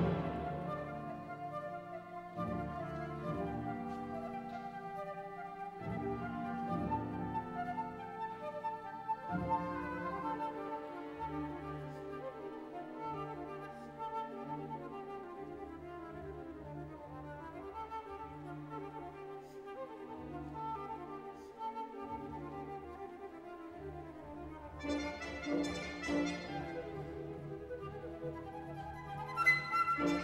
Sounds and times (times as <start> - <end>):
Violin, fiddle: 0.0 - 30.2.